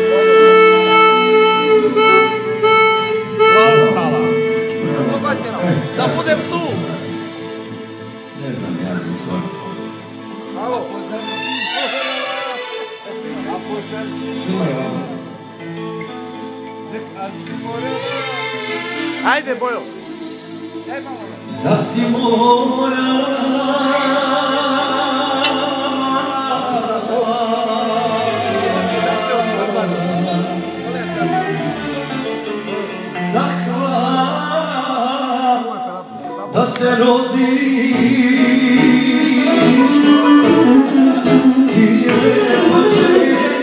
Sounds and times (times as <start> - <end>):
Music: 0.0 - 43.6
Male singing: 21.5 - 31.5, 33.3 - 43.6.